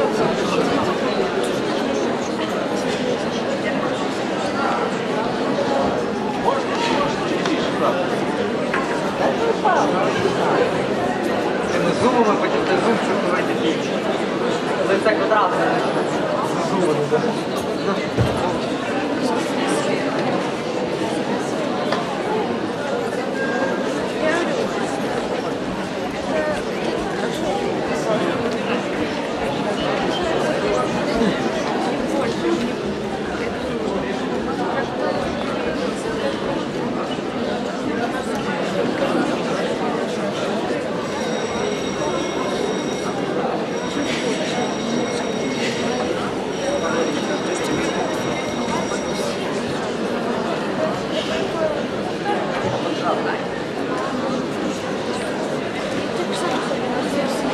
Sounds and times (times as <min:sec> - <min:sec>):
Speech: 0:00.0 - 0:57.5.